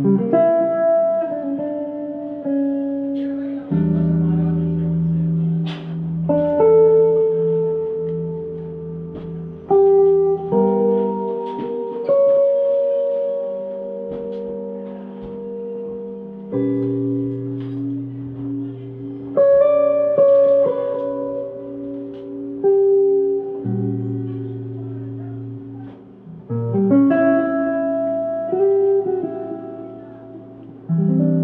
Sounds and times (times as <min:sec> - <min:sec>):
Music: 0:00.0 - 0:31.4.